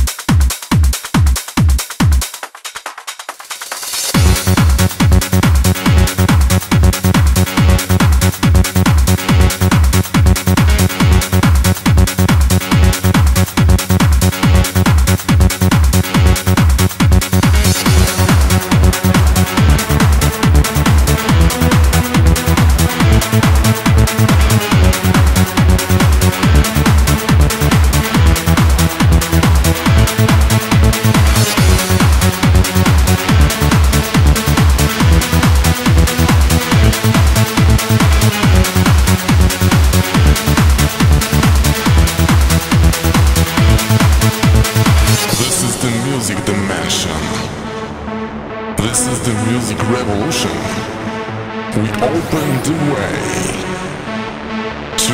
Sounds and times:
Music: 0.0 - 55.1.

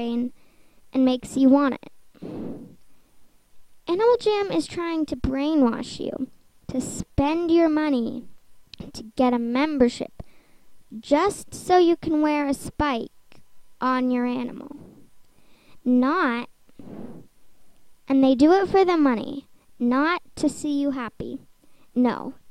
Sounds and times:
Speech: 0.0 - 0.3, 1.0 - 1.9, 3.9 - 10.1, 10.9 - 13.1, 13.8 - 14.8, 15.9 - 16.5, 18.1 - 21.4, 22.0 - 22.4.

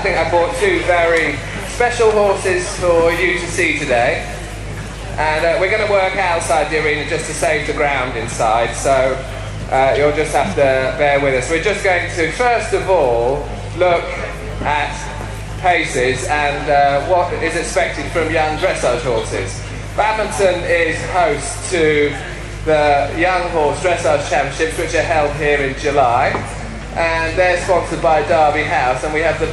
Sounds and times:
Speech: 0.0 - 29.5.

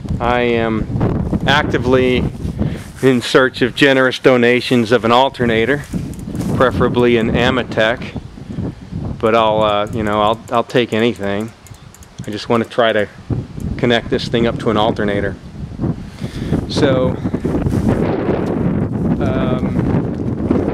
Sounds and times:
Speech: 0.2 - 0.9, 1.5 - 2.3, 3.0 - 5.9, 6.6 - 8.2, 9.2 - 11.6, 12.2 - 13.2, 13.8 - 15.4, 16.7 - 17.2, 19.2 - 19.8
Bicycle: 5.8 - 6.6, 9.9 - 13.8.

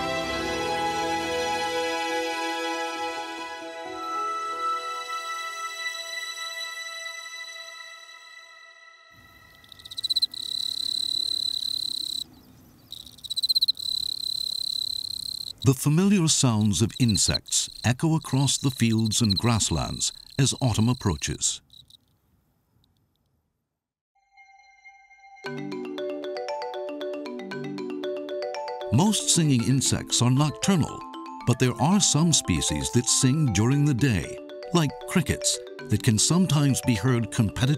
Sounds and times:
Cricket: 9.2 - 15.7, 16.9 - 22.1.

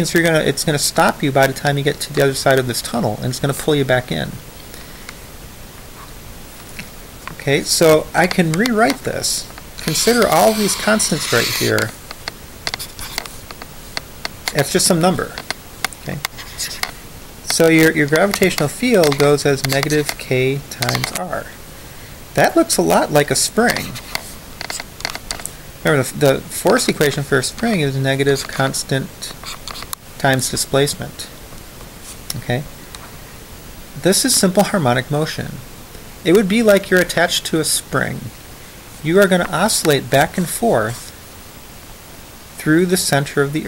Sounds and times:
Speech: 0.0 - 4.4, 7.4 - 12.0, 14.5 - 15.4, 16.0 - 16.8, 17.5 - 21.6, 22.4 - 24.0, 25.8 - 29.4, 30.2 - 31.4, 32.3 - 32.7, 34.0 - 35.6, 36.2 - 38.3, 39.0 - 41.2, 42.6 - 43.6
Inside, small room: 0.0 - 43.6.

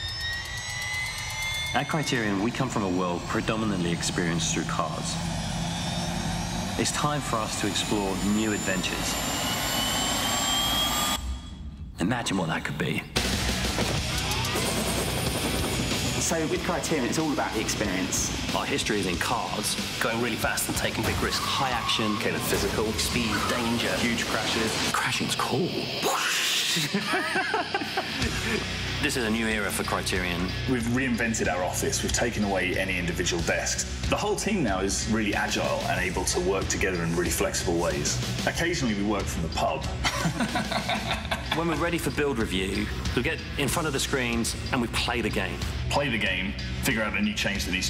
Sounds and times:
Jet engine: 0.0 - 12.0, 13.1 - 34.5.

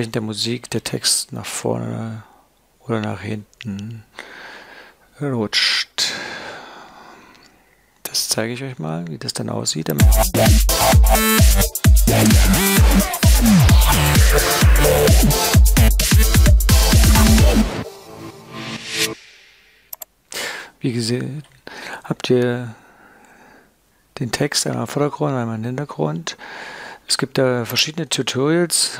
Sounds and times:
Speech: 0.0 - 4.1, 5.2 - 6.1, 8.1 - 10.0, 20.8 - 22.8, 24.2 - 26.4, 27.1 - 29.0
Music: 10.0 - 19.5.

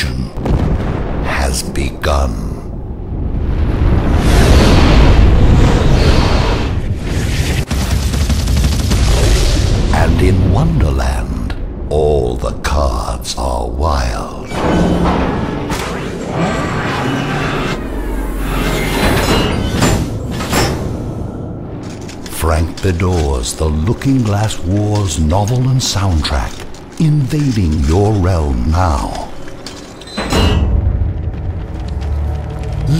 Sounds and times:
Speech: 0.0 - 0.4, 1.2 - 2.7, 9.9 - 14.5, 22.3 - 29.4.

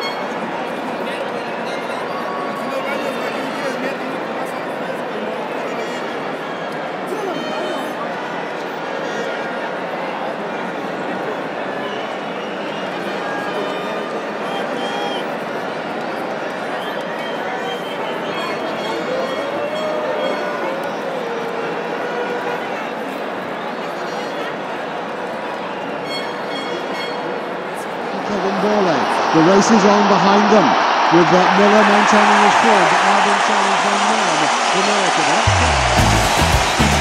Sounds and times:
Speech: 0.0 - 6.4, 27.7 - 35.6.

